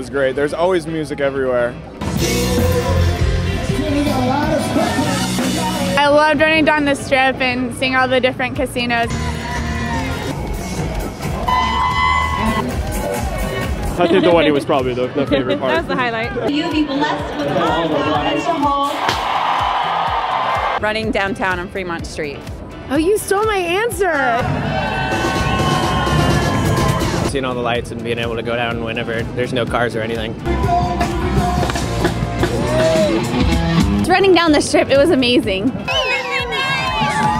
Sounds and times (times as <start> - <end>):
Music: 0.0 - 37.3
Outside, urban or manmade: 0.0 - 37.3.